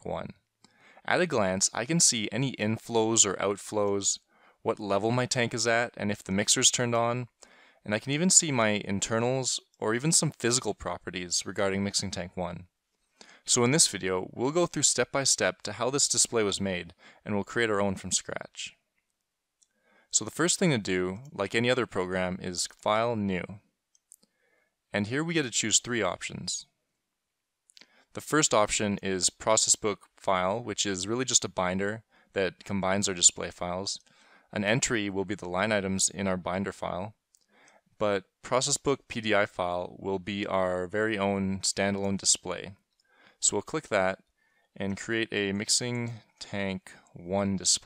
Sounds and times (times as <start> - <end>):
Speech: 0.0 - 0.4, 1.1 - 12.7, 13.3 - 18.8, 20.1 - 23.6, 25.0 - 26.7, 28.2 - 37.2, 38.0 - 42.8, 43.4 - 44.2, 44.8 - 47.8.